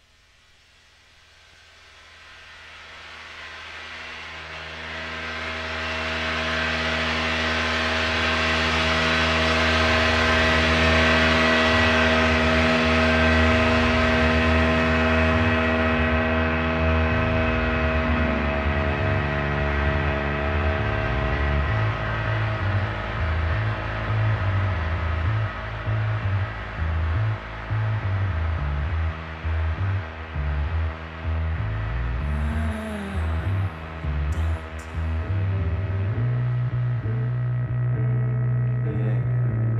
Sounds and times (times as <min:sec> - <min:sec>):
Electronica: 0:21.0 - 0:39.7.